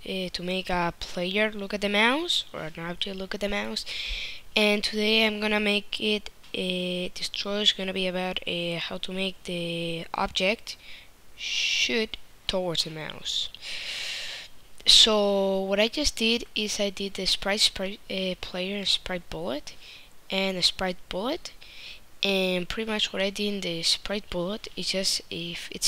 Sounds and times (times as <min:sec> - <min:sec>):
Speech: 0:00.0 - 0:03.9, 0:04.6 - 0:10.8, 0:11.4 - 0:13.6, 0:14.8 - 0:21.6, 0:22.2 - 0:25.8.